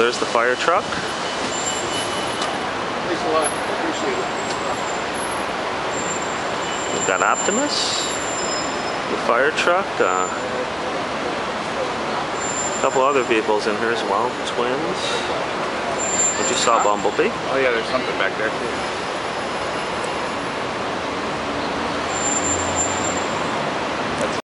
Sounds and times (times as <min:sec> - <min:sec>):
Speech: 0:00.0 - 0:01.0, 0:06.9 - 0:08.1, 0:09.1 - 0:10.7, 0:12.8 - 0:15.4, 0:16.4 - 0:18.7
Truck: 0:00.0 - 0:24.4.